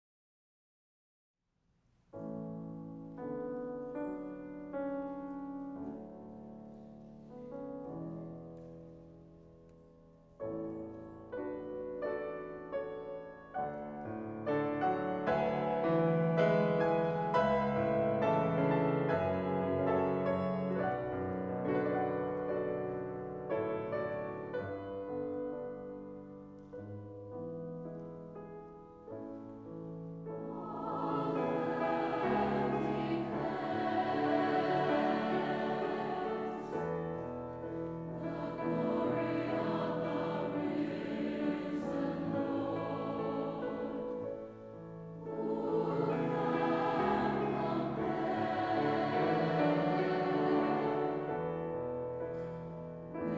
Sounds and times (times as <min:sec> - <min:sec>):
Music: 0:01.6 - 0:53.3.